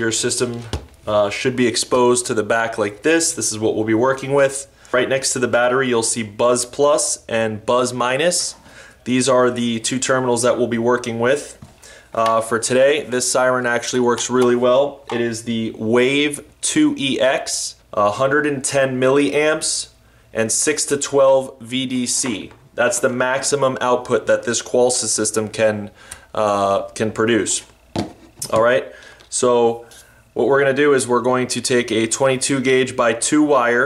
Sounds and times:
Speech: 0.0 - 11.6, 12.2 - 27.7, 28.4 - 33.8.

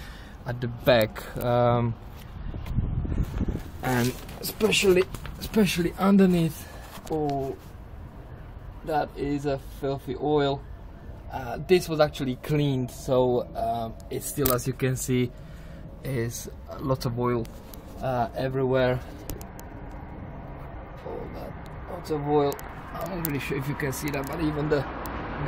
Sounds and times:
Speech: 0.5 - 2.0, 3.8 - 7.6, 8.8 - 10.6, 11.3 - 15.3, 16.0 - 19.1, 21.0 - 25.4.

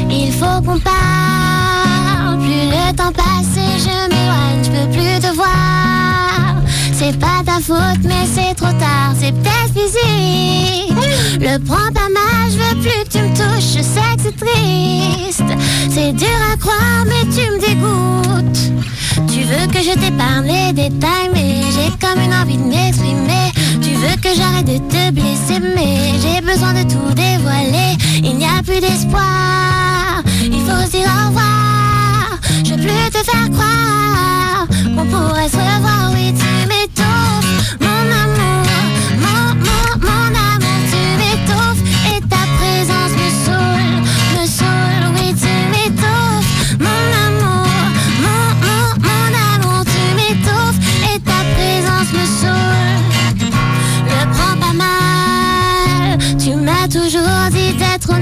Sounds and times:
Music: 0.0 - 58.2.

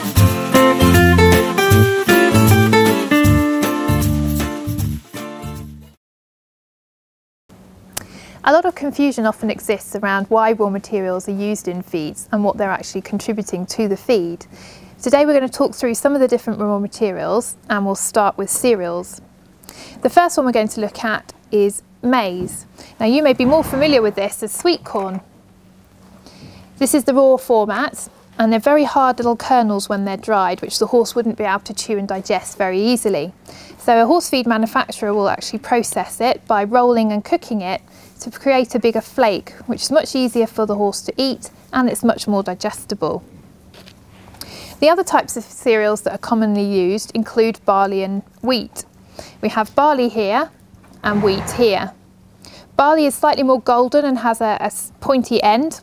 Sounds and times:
Speech: 8.4 - 19.2, 20.0 - 25.2, 26.8 - 43.2, 44.8 - 52.0, 52.8 - 55.8.

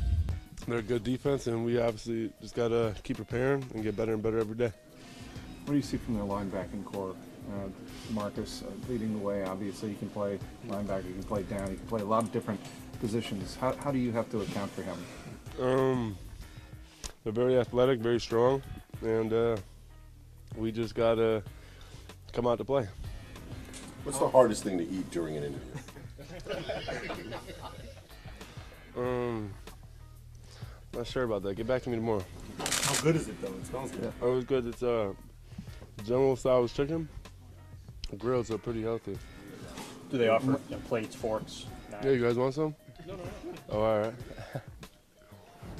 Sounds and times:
Music: 0.0 - 45.7
Speech: 0.6 - 4.8, 17.2 - 19.6, 20.6 - 21.4, 22.3 - 23.0, 24.1 - 25.7, 31.0 - 32.3, 38.1 - 39.2, 40.1 - 44.2.

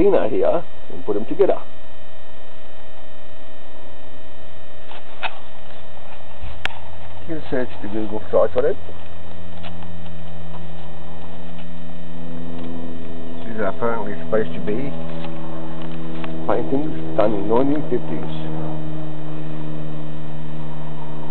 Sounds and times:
Speech: 0.0 - 1.7, 7.3 - 8.8, 13.4 - 14.9, 16.5 - 18.5.

